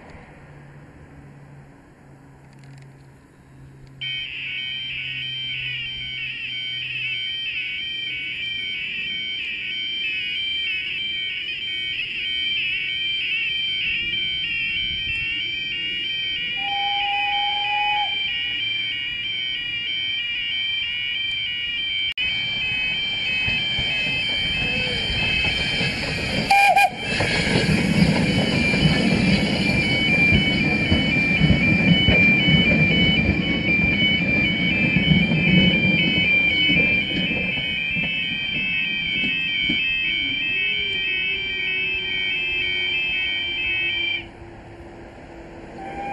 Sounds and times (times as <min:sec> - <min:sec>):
Vehicle: 0:00.0 - 0:08.7, 0:22.2 - 0:46.1
Heavy engine (low frequency): 0:00.0 - 0:46.1.